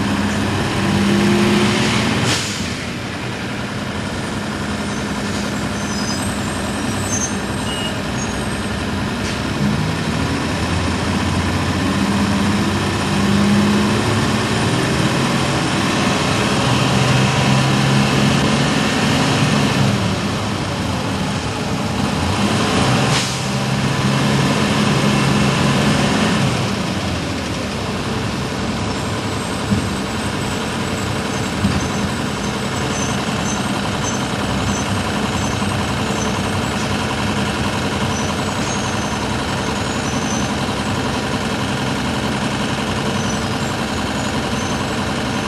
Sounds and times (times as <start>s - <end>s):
Bus: 0.0s - 45.4s.